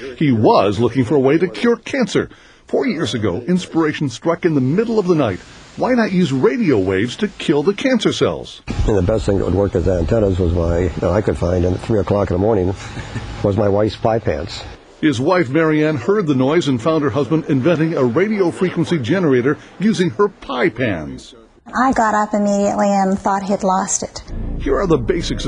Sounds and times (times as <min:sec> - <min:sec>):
Speech: 0:00.0 - 0:12.8, 0:13.4 - 0:25.4.